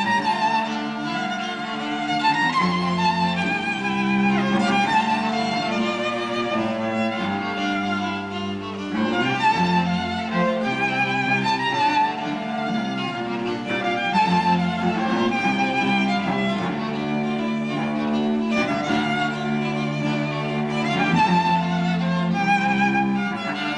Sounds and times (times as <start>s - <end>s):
Classical music: 0.0s - 23.7s
Orchestra: 0.0s - 23.7s
String section: 0.0s - 23.7s
Violin, fiddle: 0.0s - 23.7s.